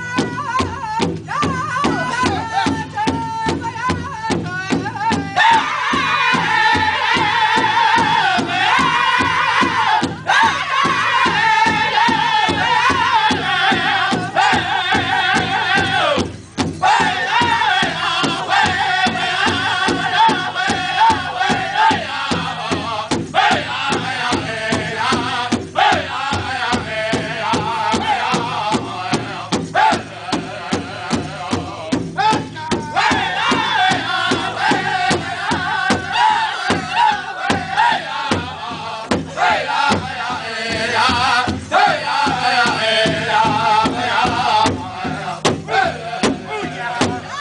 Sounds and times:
Music: 0:00.0 - 0:47.4.

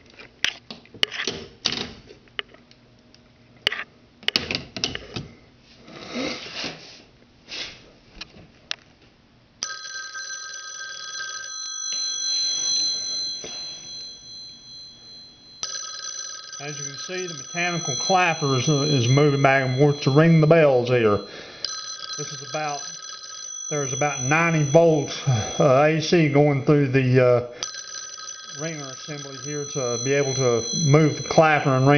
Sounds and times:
Telephone: 0:09.6 - 0:26.4, 0:27.6 - 0:31.9.

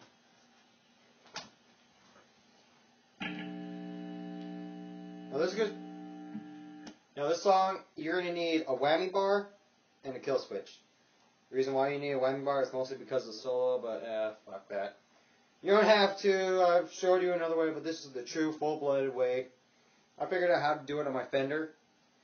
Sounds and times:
Speech: 0:05.3 - 0:05.8, 0:07.2 - 0:10.9, 0:11.5 - 0:15.0, 0:15.6 - 0:19.6, 0:20.2 - 0:21.8.

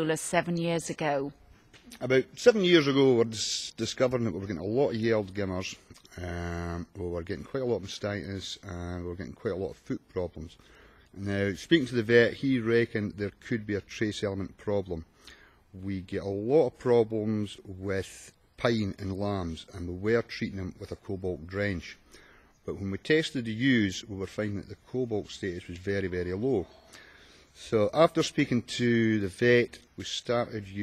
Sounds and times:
Speech: 0:00.0 - 0:01.3, 0:01.9 - 0:10.6, 0:11.2 - 0:15.1, 0:15.8 - 0:22.0, 0:22.7 - 0:26.7, 0:27.6 - 0:30.8.

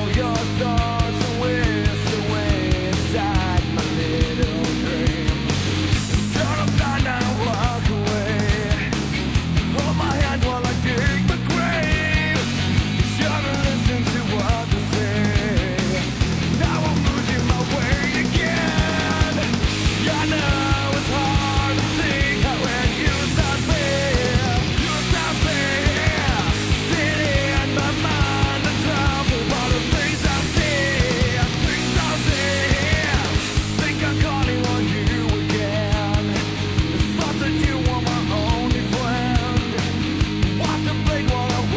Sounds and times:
Pop music: 0:00.0 - 0:41.7.

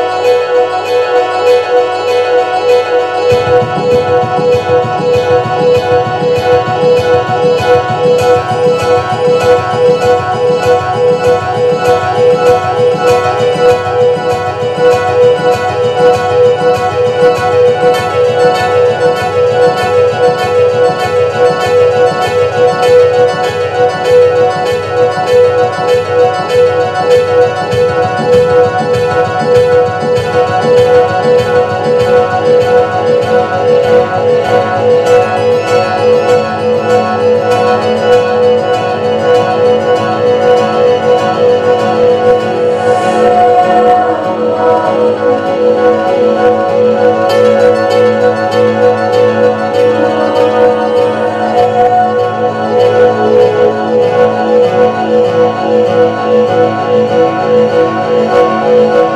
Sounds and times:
Music: 0:00.0 - 0:59.1.

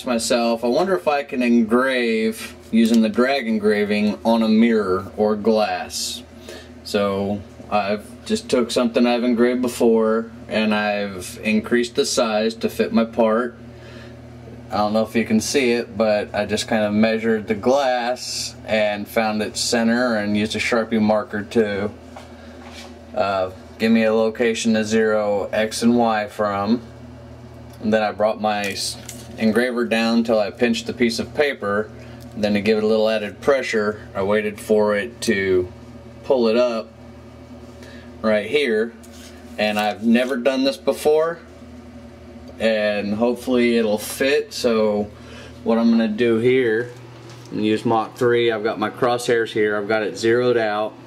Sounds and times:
Speech: 0:00.0 - 0:13.6, 0:14.7 - 0:22.0, 0:23.1 - 0:26.9, 0:27.8 - 0:37.0, 0:38.2 - 0:39.0, 0:39.6 - 0:41.5, 0:42.6 - 0:51.0.

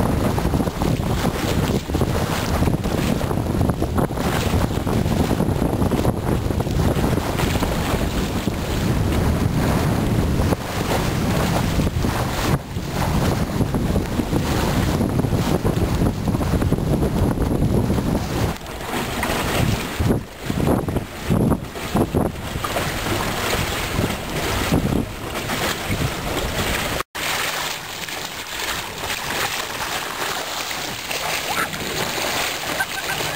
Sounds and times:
Wind noise (microphone): 0:00.0 - 0:27.0
Ocean: 0:00.0 - 0:33.3
Sailboat, sailing ship: 0:00.0 - 0:33.3.

